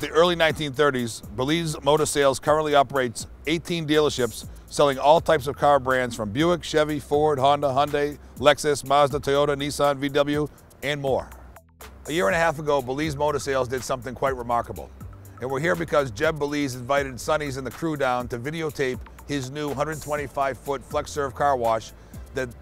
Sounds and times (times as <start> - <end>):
Speech: 0.0 - 11.3, 12.1 - 22.6
Music: 0.0 - 22.6.